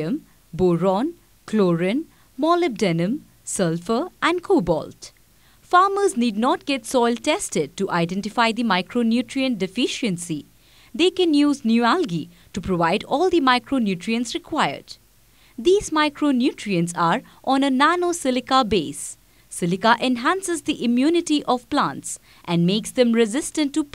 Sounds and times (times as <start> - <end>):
Speech: 0.0 - 15.0, 15.6 - 23.9.